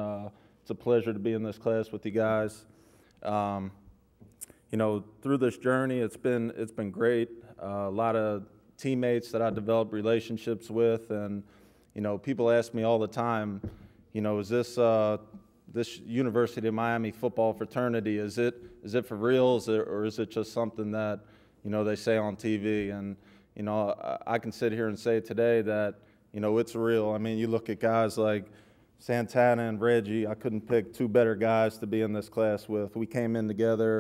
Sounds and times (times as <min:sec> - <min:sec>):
Male speech, man speaking: 0:00.0 - 0:03.8, 0:04.7 - 0:34.0
Narration, monologue: 0:00.0 - 0:34.0.